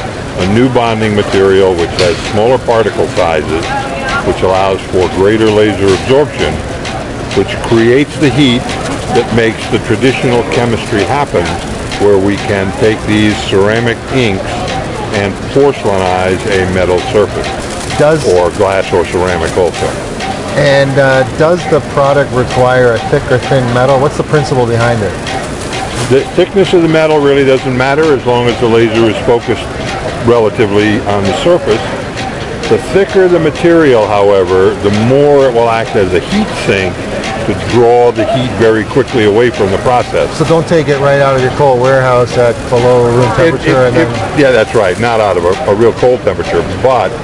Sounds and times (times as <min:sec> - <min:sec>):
Speech: 0:00.0 - 0:06.7, 0:07.3 - 0:25.3, 0:26.0 - 0:47.2.